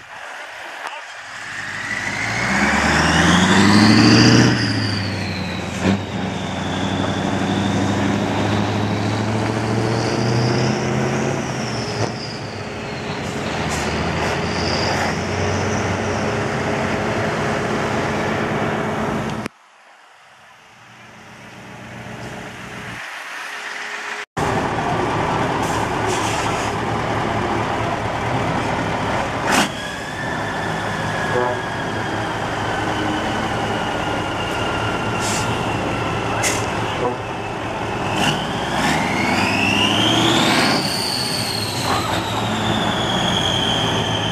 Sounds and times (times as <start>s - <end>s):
Truck: 0.0s - 20.0s, 20.7s - 44.3s.